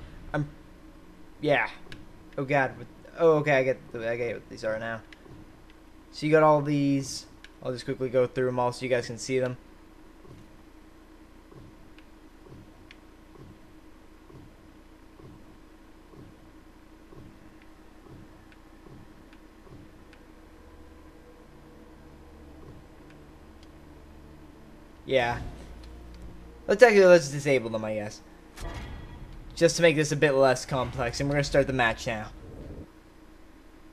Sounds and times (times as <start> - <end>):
Speech: 1.4 - 1.8, 2.4 - 5.0, 6.2 - 9.6, 25.1 - 25.5, 26.7 - 28.2, 29.6 - 32.4.